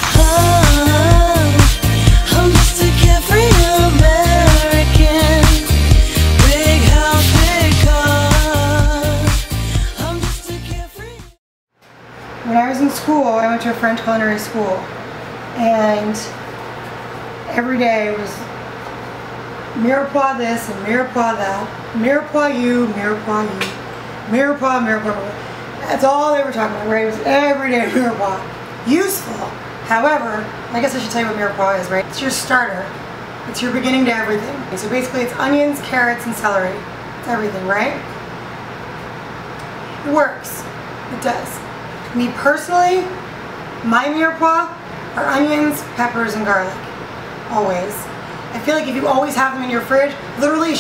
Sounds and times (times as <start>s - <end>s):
Speech: 12.4s - 14.9s, 15.6s - 16.4s, 17.5s - 18.5s, 19.8s - 38.1s, 40.0s - 43.2s, 43.8s - 46.9s, 47.5s - 50.8s.